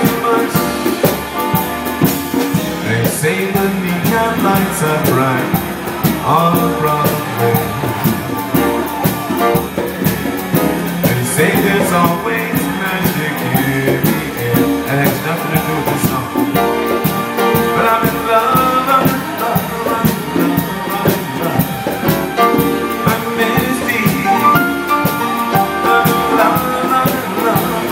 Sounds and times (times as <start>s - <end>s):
Piano: 0.0s - 27.9s
Vocal music: 0.0s - 27.9s.